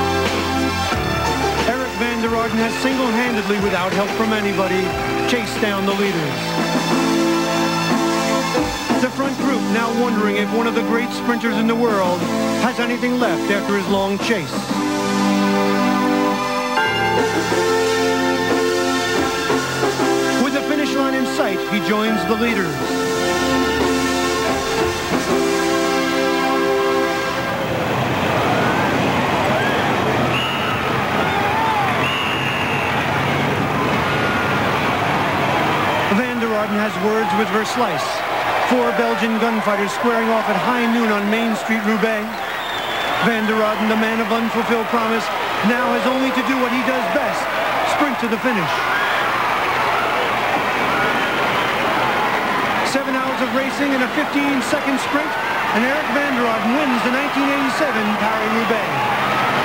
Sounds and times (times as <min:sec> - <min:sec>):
Music: 0:00.0 - 0:59.6
Speech: 0:01.6 - 0:06.4, 0:08.9 - 0:14.7, 0:20.4 - 0:22.8, 0:36.1 - 0:42.4, 0:43.2 - 0:48.8, 0:52.8 - 0:59.0.